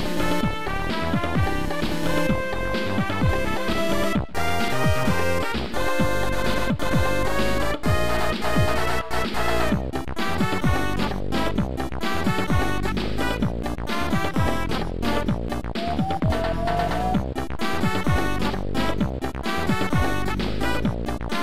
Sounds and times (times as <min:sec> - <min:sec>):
Soundtrack music: 0:00.0 - 0:21.4
Video game music: 0:00.0 - 0:21.4.